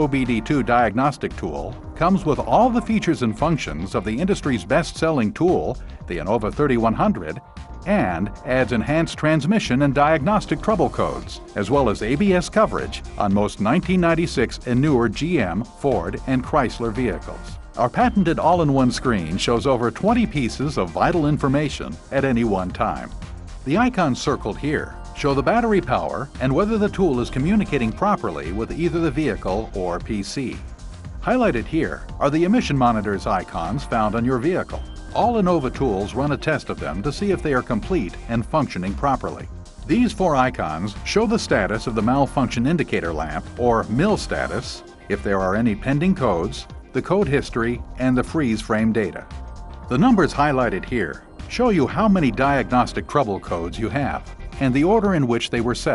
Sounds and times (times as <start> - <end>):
Speech: 0.0 - 23.1, 23.7 - 30.6, 31.2 - 49.2, 49.9 - 55.9
Music: 0.0 - 55.9.